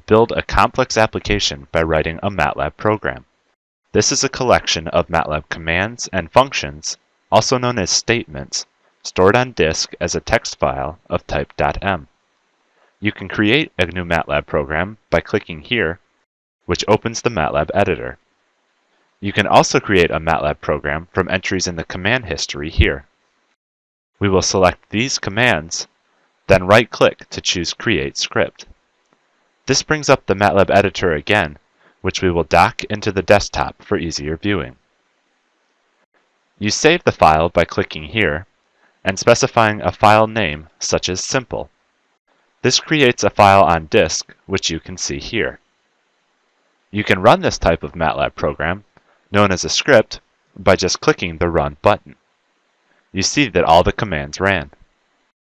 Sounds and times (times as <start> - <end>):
Speech: 0.0 - 3.3, 4.0 - 12.1, 13.0 - 16.0, 16.7 - 18.2, 19.2 - 23.1, 24.2 - 25.9, 26.5 - 28.7, 29.7 - 34.8, 36.6 - 41.7, 42.6 - 45.6, 47.0 - 52.2, 53.1 - 54.8.